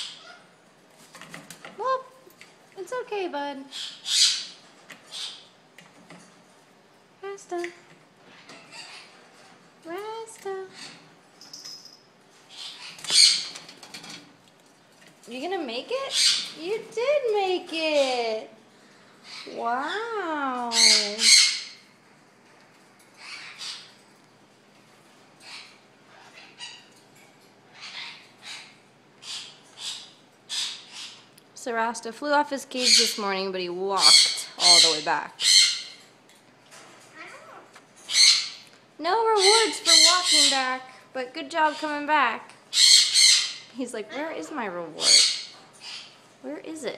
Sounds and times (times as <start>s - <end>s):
Speech: 1.8s - 2.2s, 2.8s - 3.7s, 7.2s - 7.8s, 9.8s - 10.8s, 15.3s - 18.6s, 19.5s - 21.4s, 31.6s - 35.4s, 39.0s - 42.6s, 43.8s - 45.2s, 46.4s - 46.9s.